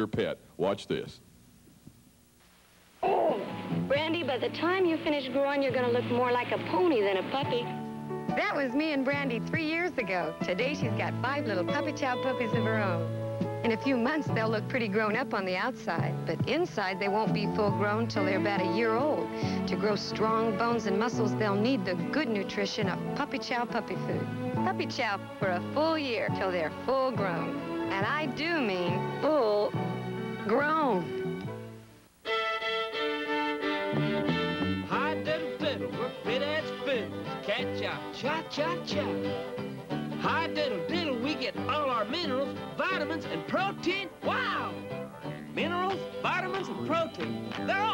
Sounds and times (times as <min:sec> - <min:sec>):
Music: 0:03.0 - 0:47.9.